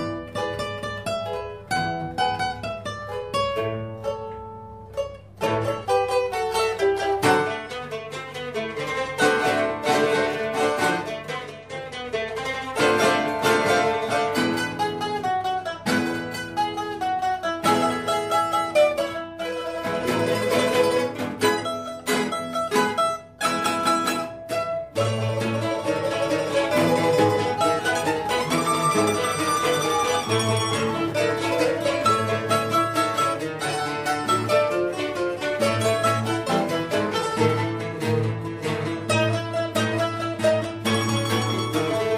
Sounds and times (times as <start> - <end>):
Mandolin: 0.0 - 42.1
Zither: 0.0 - 42.1.